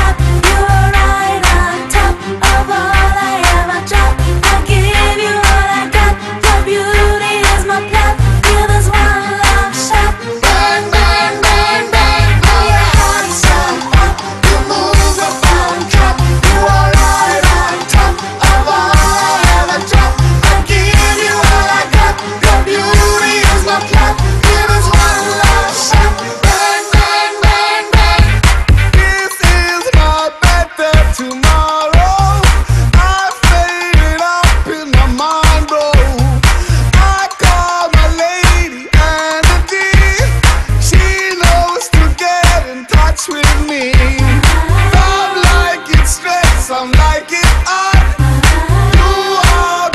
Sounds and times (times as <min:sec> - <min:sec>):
Music: 0:00.0 - 0:49.9.